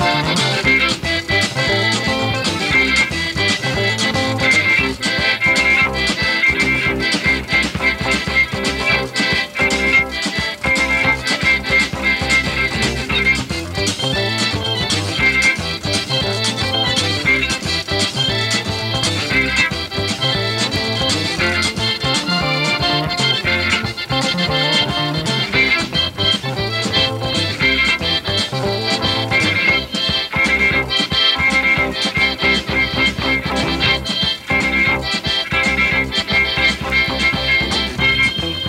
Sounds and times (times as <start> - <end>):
Violin, fiddle: 0.0 - 38.6.